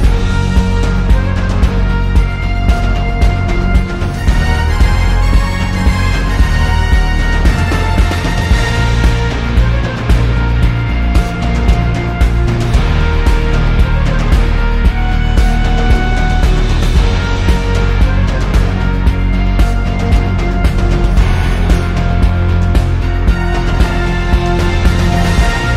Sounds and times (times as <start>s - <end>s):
Music: 0.0s - 25.7s.